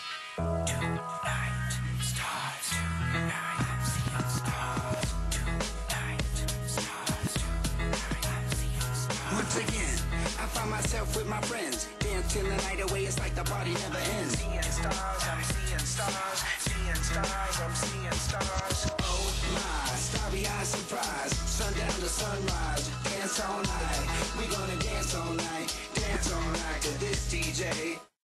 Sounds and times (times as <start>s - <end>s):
Music: 0.0s - 28.2s.